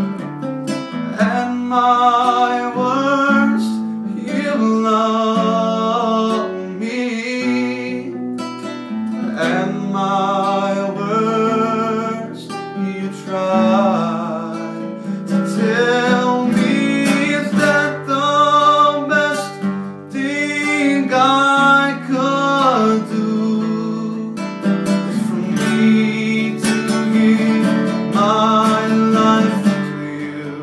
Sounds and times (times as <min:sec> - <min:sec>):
Music: 0:00.0 - 0:30.6
Male singing: 0:01.1 - 0:08.2, 0:09.1 - 0:24.4, 0:25.0 - 0:30.6.